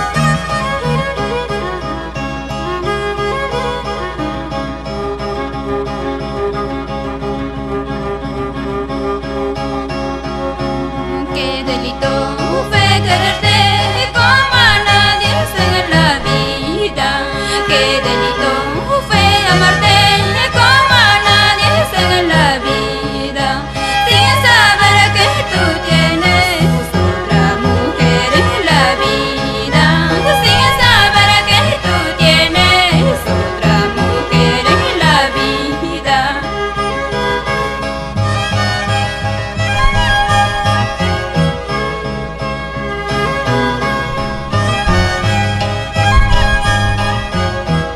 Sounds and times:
Music: 0.0 - 47.9.

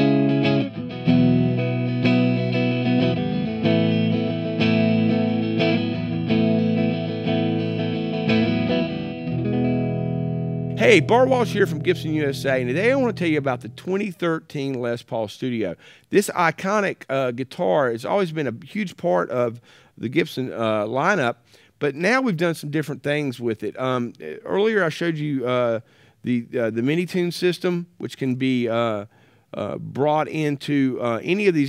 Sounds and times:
Speech: 10.8 - 31.6.

